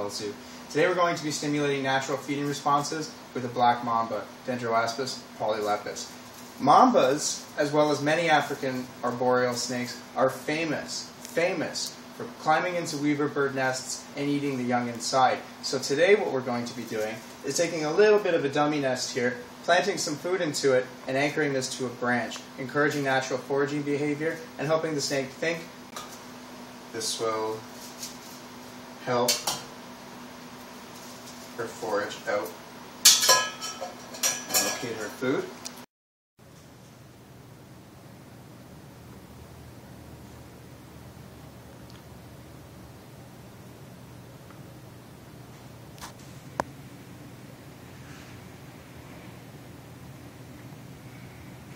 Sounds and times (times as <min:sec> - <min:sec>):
Speech: 0:00.0 - 0:25.7, 0:26.9 - 0:27.7, 0:29.0 - 0:29.6, 0:31.6 - 0:32.6, 0:34.5 - 0:35.6.